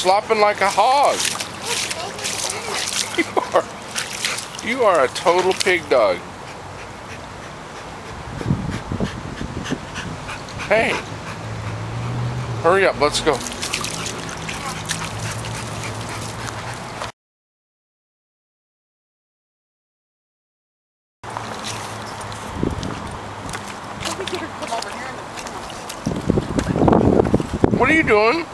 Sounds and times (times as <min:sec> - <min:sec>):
Speech: 0:00.0 - 0:02.9, 0:04.6 - 0:06.2, 0:10.7 - 0:11.0, 0:12.7 - 0:13.4, 0:24.0 - 0:25.3, 0:27.8 - 0:28.5.